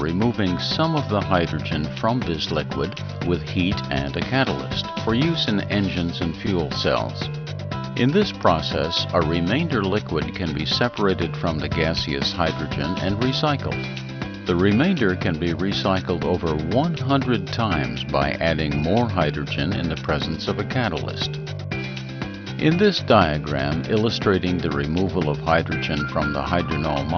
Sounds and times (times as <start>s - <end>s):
Speech: 0.0s - 7.3s, 8.0s - 13.8s, 14.5s - 21.4s, 22.6s - 27.1s
Music: 0.0s - 27.1s.